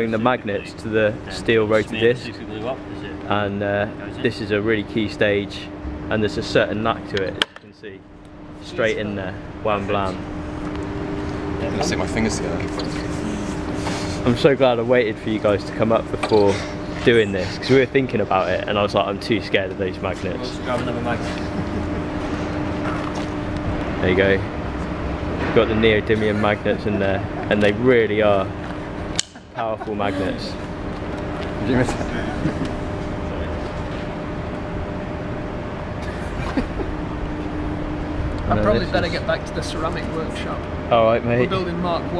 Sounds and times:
Speech: 8.6s - 10.2s, 14.3s - 21.4s.

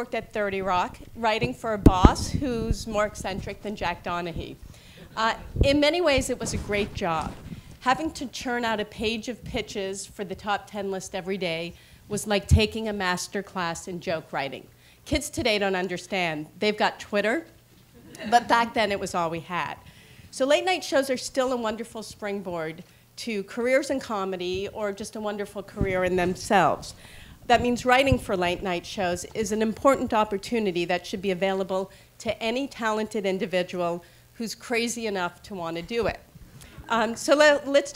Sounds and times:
Speech: 0.0s - 17.5s, 18.2s - 19.8s, 20.4s - 36.2s, 36.9s - 37.9s.

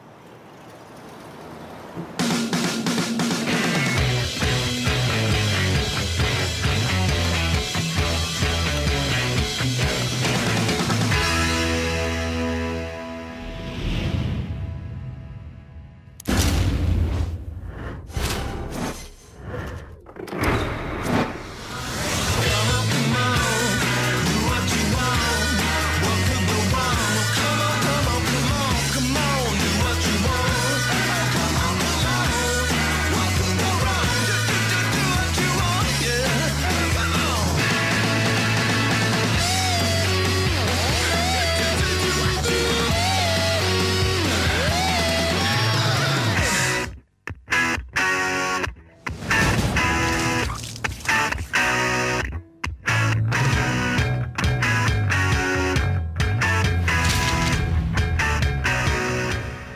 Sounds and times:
Guitar: 2.2s - 16.1s, 20.3s - 59.7s.

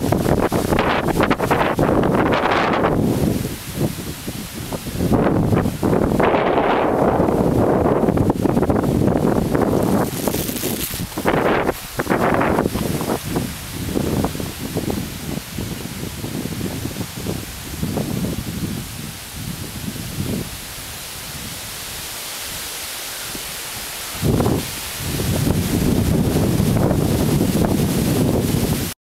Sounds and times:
Rustling leaves: 0.0s - 29.0s.

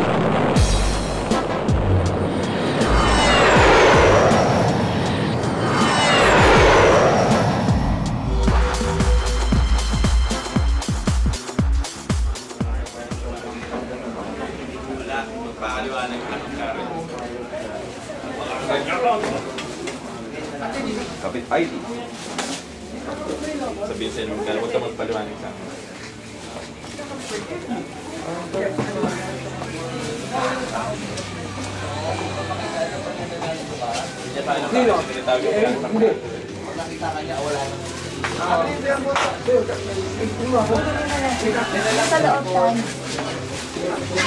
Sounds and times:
Speech: 12.5s - 44.2s.

